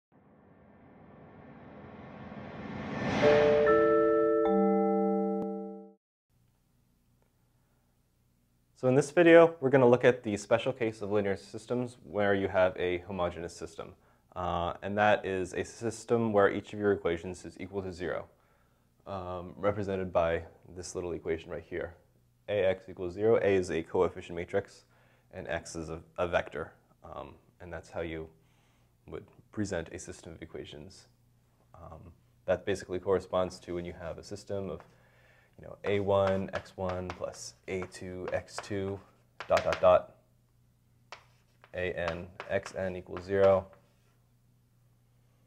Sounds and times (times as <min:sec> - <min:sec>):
Inside, small room: 0:00.1 - 0:45.4
Music: 0:03.0 - 0:06.0
Speech: 0:08.8 - 0:18.3, 0:19.0 - 0:28.4, 0:29.0 - 0:31.1, 0:31.7 - 0:34.8, 0:35.6 - 0:40.2, 0:41.7 - 0:43.8.